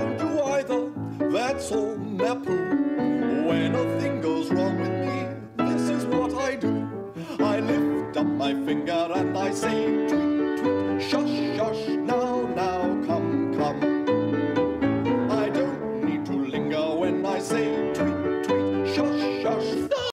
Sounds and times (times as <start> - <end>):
Music: 0.0 - 20.1.